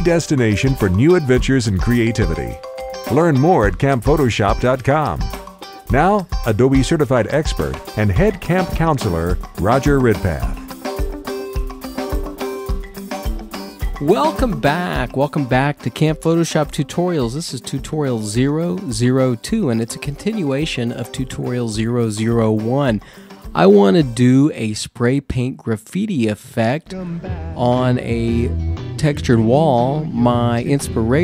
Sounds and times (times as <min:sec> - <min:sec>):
Speech: 0:00.0 - 0:05.3, 0:05.9 - 0:10.6, 0:14.0 - 0:23.0, 0:23.6 - 0:31.2
Music: 0:00.0 - 0:24.7, 0:26.8 - 0:31.2.